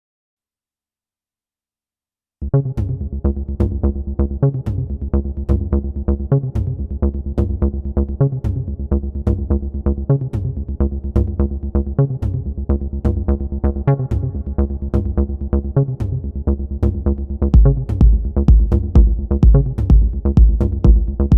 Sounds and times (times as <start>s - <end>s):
Techno: 2.5s - 21.3s.